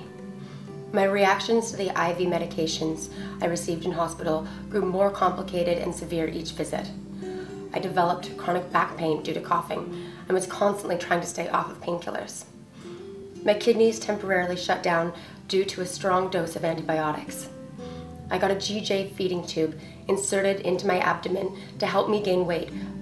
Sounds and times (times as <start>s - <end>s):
Music: 0.0s - 23.0s
Female speech, woman speaking: 1.0s - 7.0s, 7.8s - 12.5s, 13.5s - 17.5s, 18.3s - 22.8s.